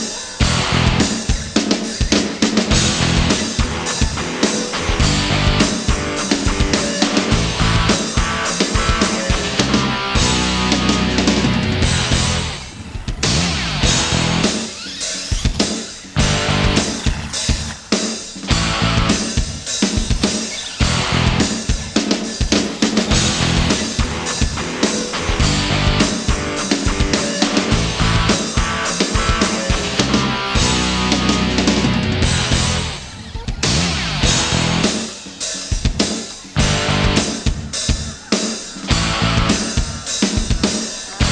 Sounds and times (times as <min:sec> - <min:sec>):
Music: 0:00.0 - 0:41.3.